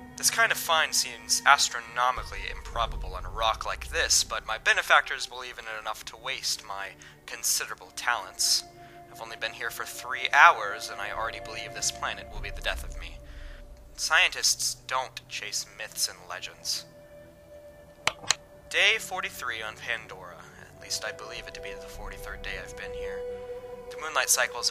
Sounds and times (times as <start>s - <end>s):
Music: 0.0s - 24.7s
Speech: 0.2s - 13.2s, 14.0s - 16.9s, 18.7s - 23.2s, 23.9s - 24.7s.